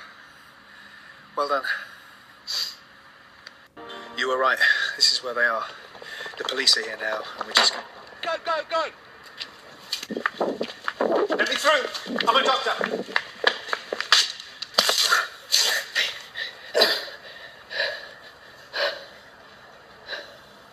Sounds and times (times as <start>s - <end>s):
Speech: 1.4s - 1.9s, 6.4s - 8.9s, 11.4s - 12.9s.